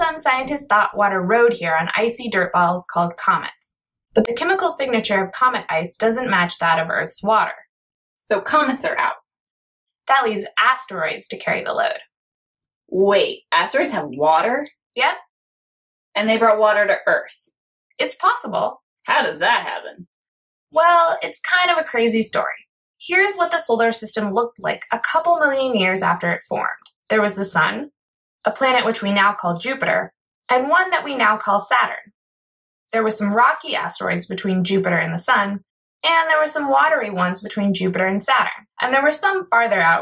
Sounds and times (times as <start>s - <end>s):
Speech: 0.0s - 7.6s, 8.2s - 9.2s, 10.1s - 12.0s, 12.9s - 15.2s, 16.2s - 20.0s, 20.8s - 27.9s, 28.5s - 32.1s, 33.0s - 40.0s.